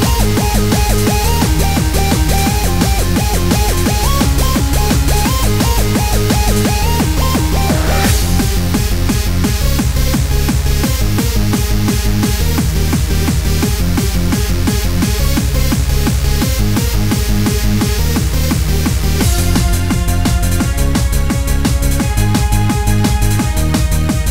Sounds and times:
Techno: 0.0s - 24.3s.

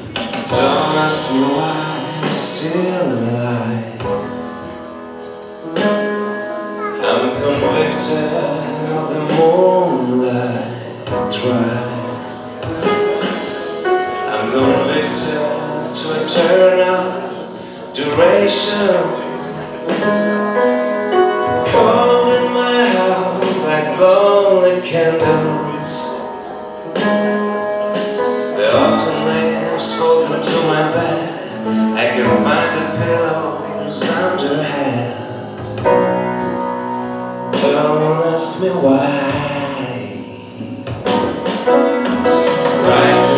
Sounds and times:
Music: 0.0s - 43.3s.

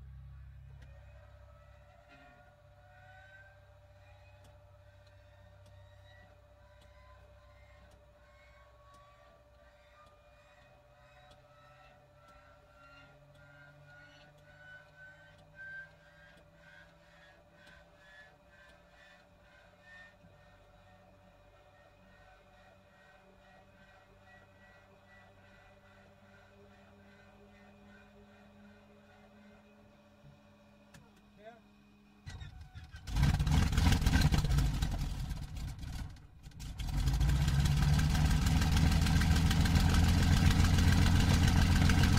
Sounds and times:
Aircraft: 11.4s - 42.1s.

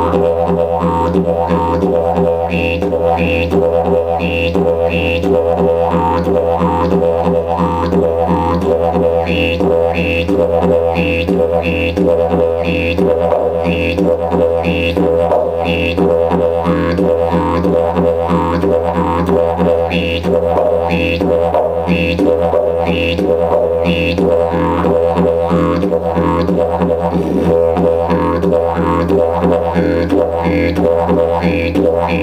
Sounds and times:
Didgeridoo: 0.0s - 32.2s.

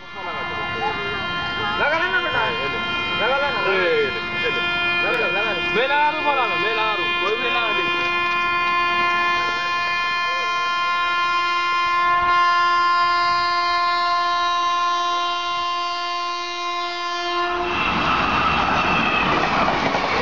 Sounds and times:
Train horn: 0.0s - 19.5s
Railroad car, train wagon: 0.0s - 20.2s.

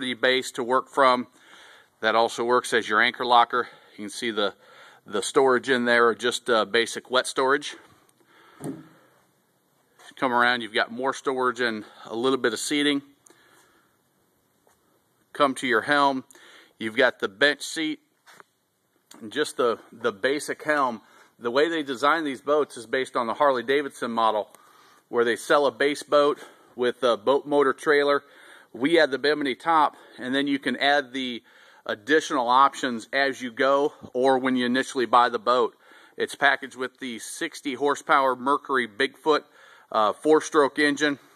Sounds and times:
Speech: 0.0s - 1.3s, 2.0s - 7.9s, 10.0s - 13.2s, 15.3s - 18.1s, 19.2s - 41.3s.

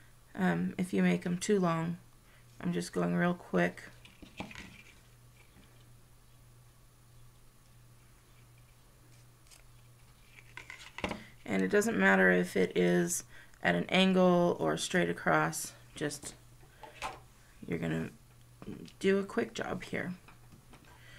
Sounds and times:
Speech: 0.4s - 2.0s, 2.6s - 4.0s, 11.5s - 16.4s, 17.6s - 20.2s
Scissors: 9.4s - 9.7s.

